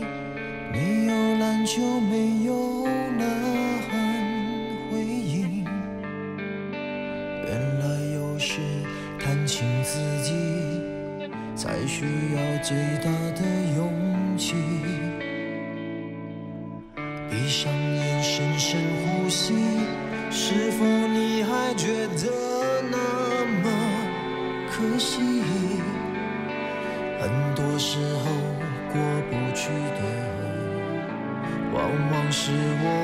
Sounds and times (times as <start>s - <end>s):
Music: 0.0s - 33.0s.